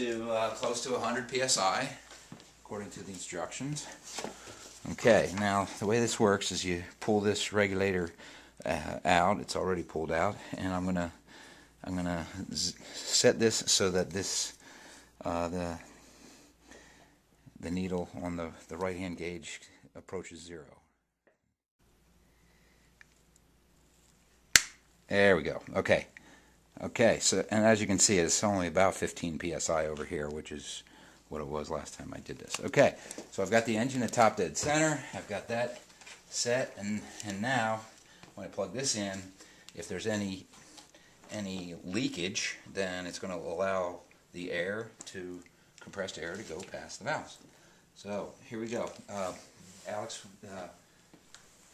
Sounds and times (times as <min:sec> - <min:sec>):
Speech: 0:00.0 - 0:04.0, 0:04.8 - 0:11.2, 0:11.8 - 0:14.6, 0:15.2 - 0:15.9, 0:17.6 - 0:20.9, 0:25.1 - 0:26.2, 0:26.8 - 0:40.6, 0:41.3 - 0:47.4, 0:48.0 - 0:50.8.